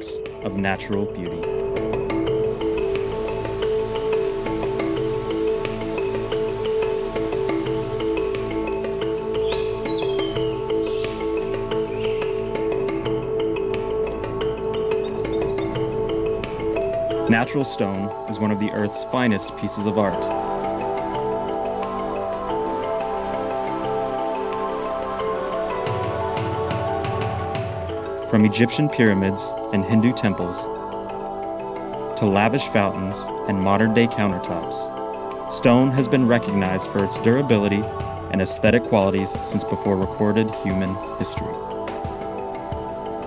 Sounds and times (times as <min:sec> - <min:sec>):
Speech: 0:00.0 - 0:01.5, 0:17.3 - 0:20.4, 0:28.3 - 0:30.7, 0:32.2 - 0:34.9, 0:35.6 - 0:41.6
Music: 0:00.0 - 0:43.2.